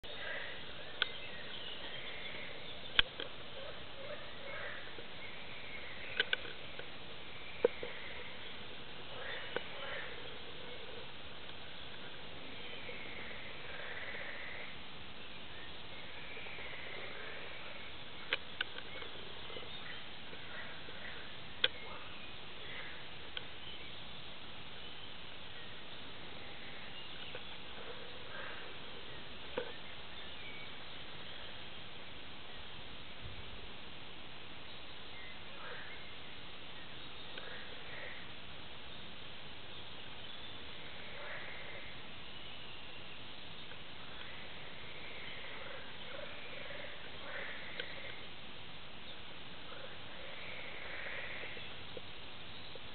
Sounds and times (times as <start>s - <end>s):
Animal: 0.1s - 11.2s, 12.0s - 14.8s, 16.0s - 23.1s, 26.2s - 29.9s, 40.6s - 42.1s, 44.1s - 48.3s, 49.6s - 51.8s.